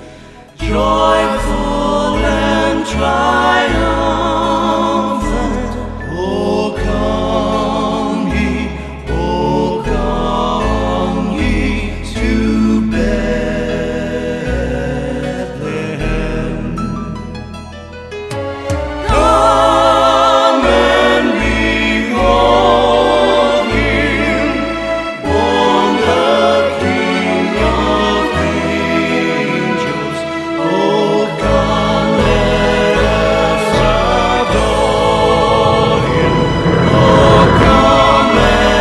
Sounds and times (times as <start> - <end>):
Soul music: 0.0 - 38.8.